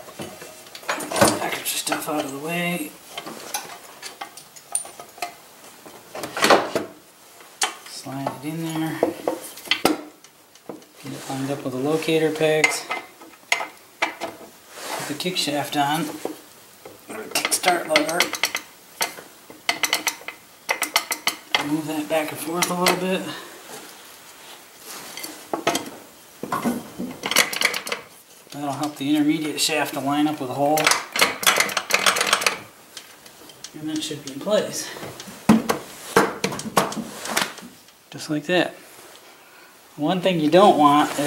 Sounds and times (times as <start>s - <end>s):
Speech: 1.3s - 3.0s, 7.9s - 9.2s, 11.0s - 12.9s, 15.1s - 16.2s, 17.1s - 18.3s, 21.6s - 23.5s, 28.6s - 30.9s, 33.7s - 35.1s, 38.1s - 38.8s, 40.0s - 41.2s.